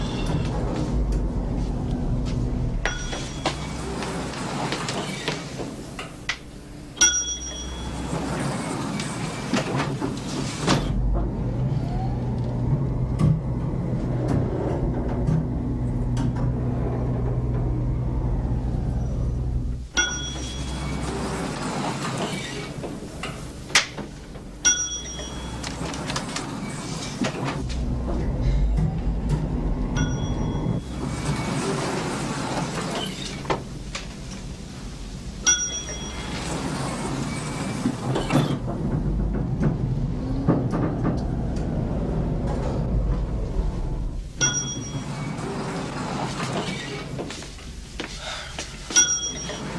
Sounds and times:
Ding: 2.9s - 3.6s, 7.0s - 8.1s, 20.0s - 20.9s, 24.6s - 25.7s, 30.0s - 30.8s, 35.5s - 36.4s, 44.4s - 45.2s, 48.9s - 49.7s
Clang: 2.9s - 3.7s, 7.0s - 8.0s, 20.0s - 20.9s, 24.6s - 25.6s, 35.4s - 36.4s, 44.4s - 45.1s, 48.9s - 49.7s.

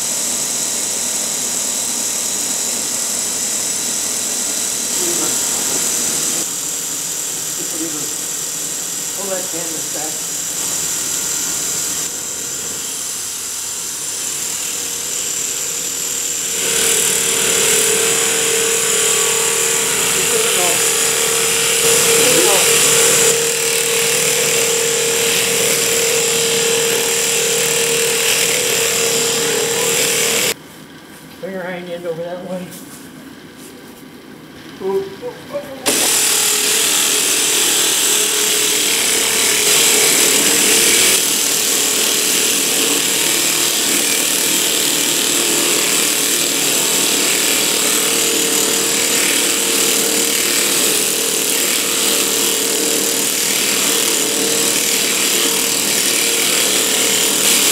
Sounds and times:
Speech: 5.0s - 5.5s, 7.6s - 8.1s, 9.2s - 10.2s, 20.2s - 20.8s, 22.2s - 22.7s, 31.4s - 32.8s, 34.8s - 36.0s.

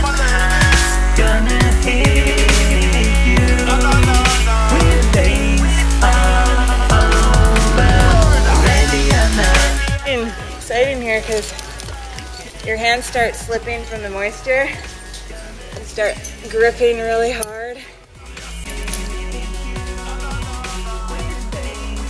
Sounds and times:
Drum and bass: 0.0s - 16.5s.

